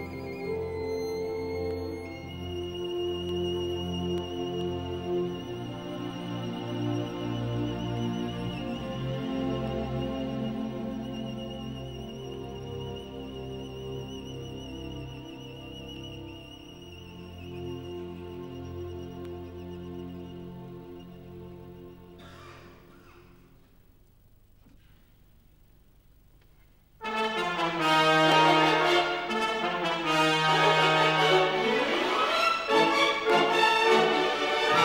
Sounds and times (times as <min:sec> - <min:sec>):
Violin, fiddle: 0:00.0 - 0:22.2, 0:27.3 - 0:34.8.